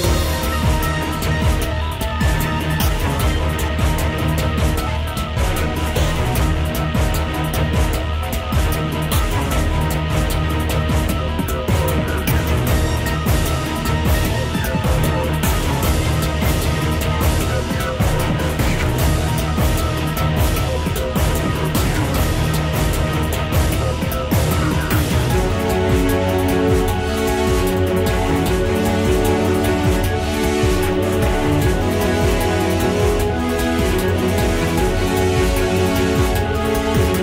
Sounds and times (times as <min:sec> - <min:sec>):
Music: 0:00.0 - 0:37.2.